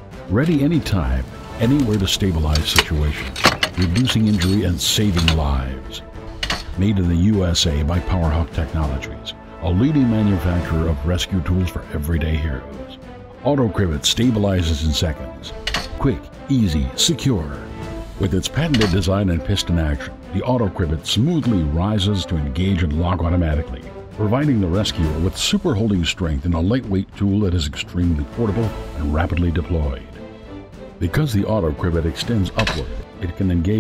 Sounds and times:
Music: 0:00.0 - 0:33.8
Speech: 0:00.3 - 0:06.1, 0:06.8 - 0:30.2, 0:31.0 - 0:33.8
Tools: 0:02.6 - 0:05.4, 0:06.4 - 0:06.7, 0:15.7 - 0:16.0, 0:18.7 - 0:19.1, 0:32.6 - 0:33.0.

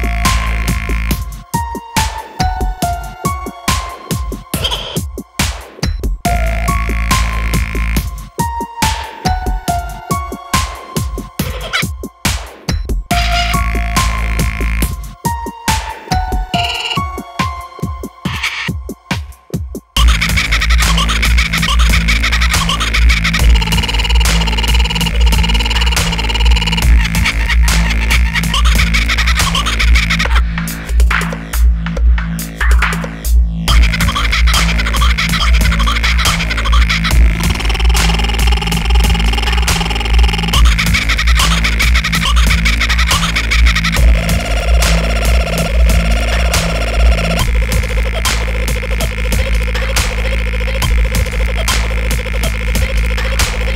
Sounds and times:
Dubstep: 0:00.0 - 0:53.7.

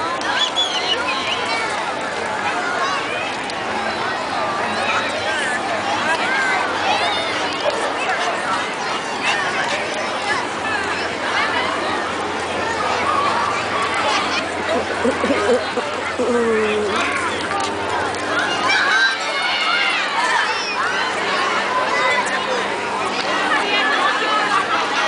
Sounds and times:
Speech: 0:00.0 - 0:25.0.

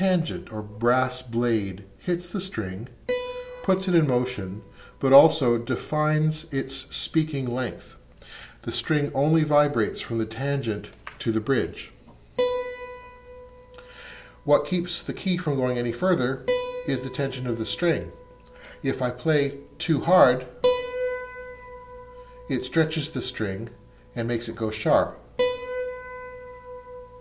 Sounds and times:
Speech: 0:00.0 - 0:03.0, 0:03.6 - 0:08.0, 0:08.6 - 0:12.0, 0:14.4 - 0:18.2, 0:18.8 - 0:20.5, 0:22.5 - 0:25.2
Mandolin: 0:00.0 - 0:05.9, 0:11.2 - 0:27.2.

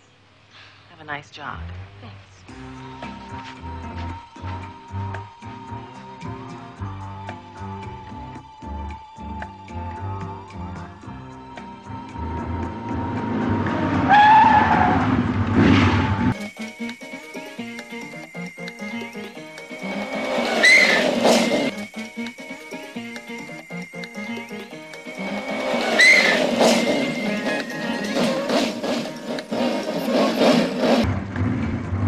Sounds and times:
Music: 0:01.6 - 0:32.0
Skidding: 0:13.1 - 0:16.4, 0:24.9 - 0:32.0.

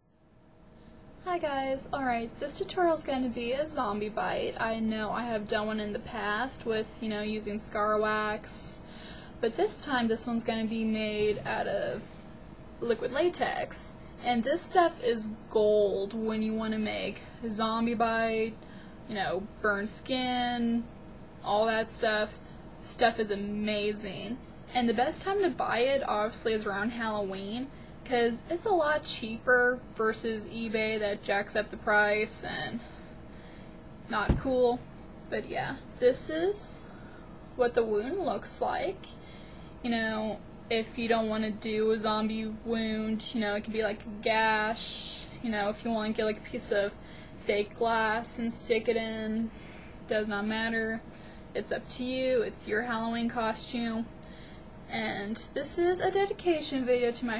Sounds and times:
Speech: 0:01.2 - 0:12.1, 0:12.8 - 0:32.9, 0:34.1 - 0:36.9, 0:37.6 - 0:39.2, 0:39.8 - 0:49.5, 0:50.1 - 0:54.2, 0:54.9 - 0:57.3.

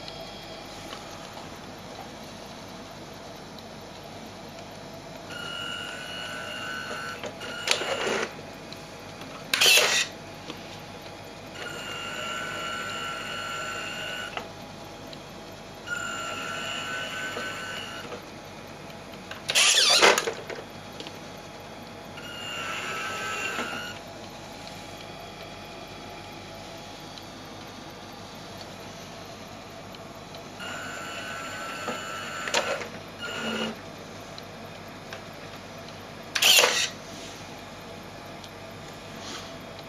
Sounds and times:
Reversing beeps: 0:05.3 - 0:08.3.

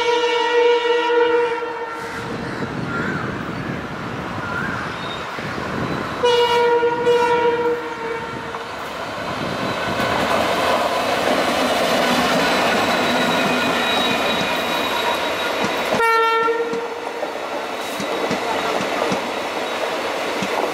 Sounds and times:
Railroad car, train wagon: 0:00.0 - 0:20.7
Train: 0:00.0 - 0:20.7.

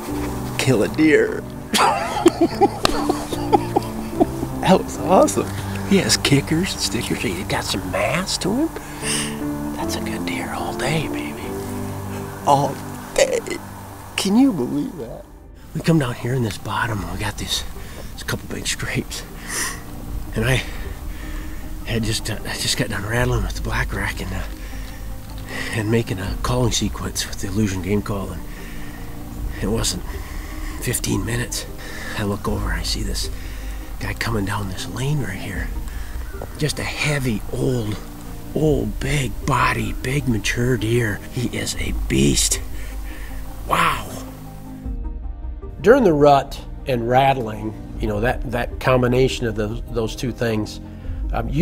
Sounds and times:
Music: 0:00.0 - 0:51.6
Speech: 0:00.6 - 0:01.4, 0:04.6 - 0:08.7, 0:09.8 - 0:11.5, 0:14.2 - 0:19.3, 0:20.4 - 0:20.7, 0:21.9 - 0:24.5, 0:25.7 - 0:28.4, 0:29.6 - 0:30.1, 0:30.8 - 0:33.3, 0:34.0 - 0:35.7, 0:36.6 - 0:38.0, 0:38.6 - 0:42.6, 0:45.8 - 0:51.6.

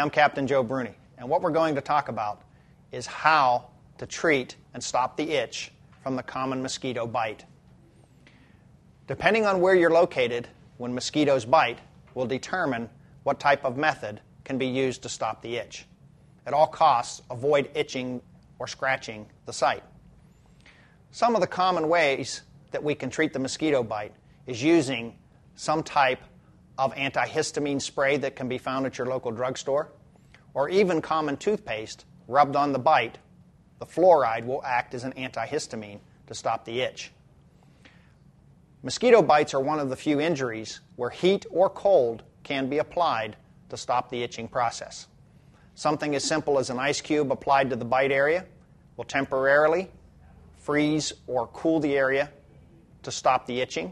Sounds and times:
Speech: 0:00.0 - 0:07.6, 0:09.1 - 0:19.9, 0:21.1 - 0:37.2, 0:38.8 - 0:45.2, 0:45.8 - 0:53.9.

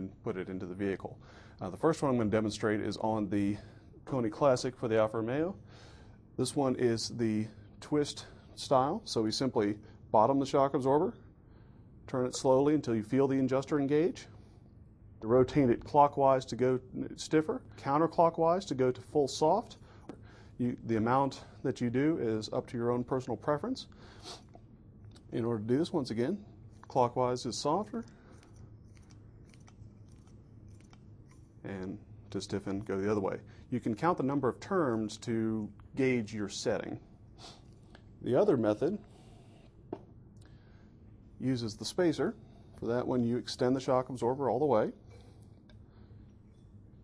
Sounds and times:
Speech: 0:00.0 - 0:05.6, 0:06.4 - 0:11.2, 0:12.1 - 0:14.4, 0:15.2 - 0:19.8, 0:20.6 - 0:23.9, 0:25.2 - 0:28.1, 0:31.6 - 0:37.1, 0:38.2 - 0:39.1, 0:41.4 - 0:45.0.

